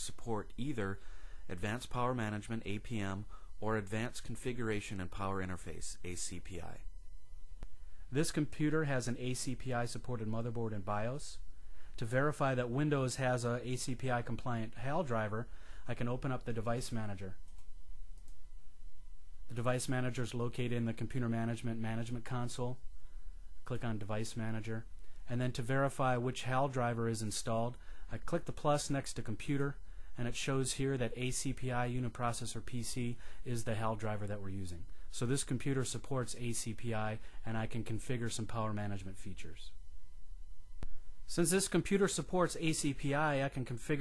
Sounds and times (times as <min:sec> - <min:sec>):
Speech: 0:00.0 - 0:06.9, 0:08.1 - 0:11.4, 0:12.0 - 0:17.4, 0:19.5 - 0:22.8, 0:23.6 - 0:39.8, 0:41.3 - 0:44.0.